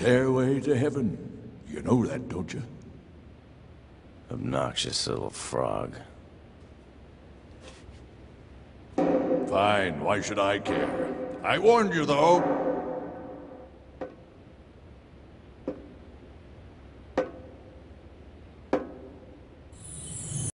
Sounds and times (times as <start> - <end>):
Speech: 0.0 - 2.8, 4.3 - 6.2, 9.5 - 12.4.